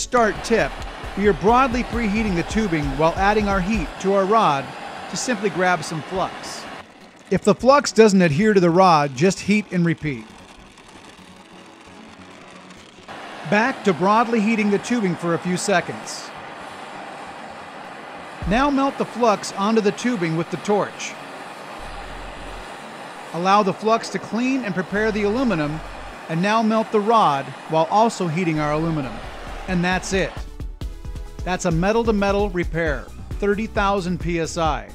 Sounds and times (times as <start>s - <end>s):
Speech: 0.0s - 6.7s, 7.3s - 10.3s, 13.5s - 16.3s, 18.4s - 21.2s, 23.4s - 30.4s, 31.5s - 34.9s
Music: 0.0s - 34.9s.